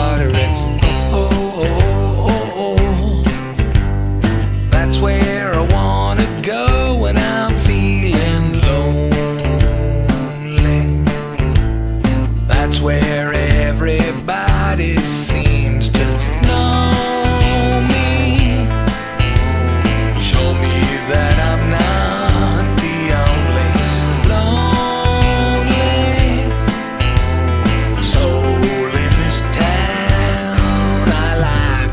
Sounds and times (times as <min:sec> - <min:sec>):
Music: 0:00.0 - 0:31.9.